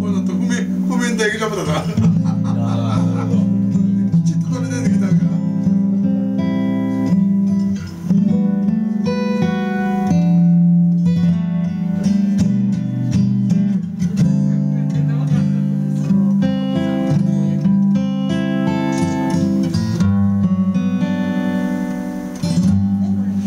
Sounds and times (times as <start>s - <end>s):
Speech: 0.0s - 2.1s, 4.1s - 5.5s, 14.2s - 15.8s, 23.0s - 23.4s
Acoustic guitar: 0.0s - 23.4s
Electric guitar: 0.0s - 23.4s.